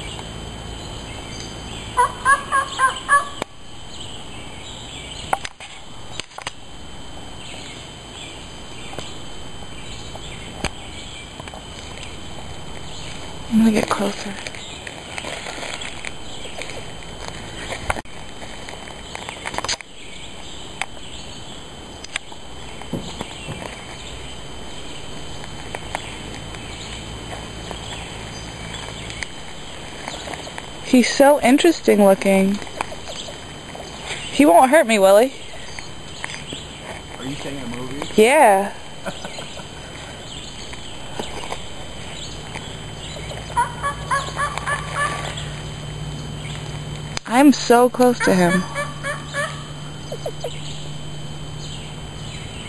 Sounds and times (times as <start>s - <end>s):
Bird vocalization, bird call, bird song: 0.0s - 5.4s, 7.4s - 9.2s, 9.8s - 11.3s, 19.0s - 21.6s, 23.0s - 29.3s, 32.9s - 34.4s, 39.1s - 39.7s, 40.3s - 46.7s, 48.6s - 51.0s, 51.6s - 52.6s
Speech: 13.5s - 14.4s, 37.2s - 38.8s, 47.3s - 48.7s.